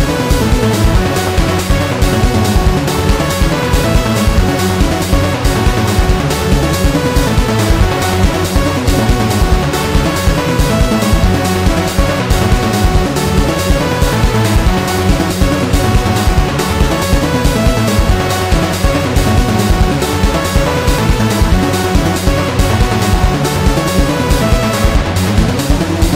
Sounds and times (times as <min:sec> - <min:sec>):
Video game music: 0:00.0 - 0:26.1.